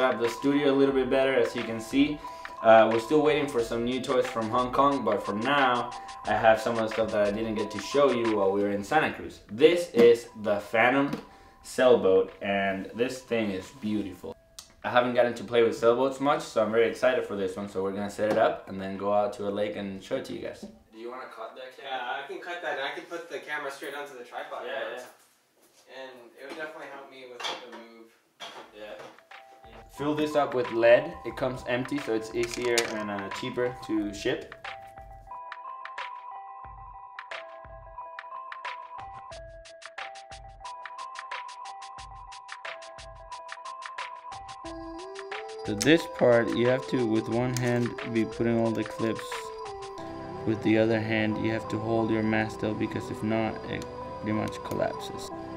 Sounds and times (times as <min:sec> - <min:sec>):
Speech: 0:00.0 - 0:25.2, 0:25.9 - 0:28.1, 0:28.8 - 0:29.1, 0:29.7 - 0:34.5, 0:45.7 - 0:49.5, 0:50.5 - 0:55.3.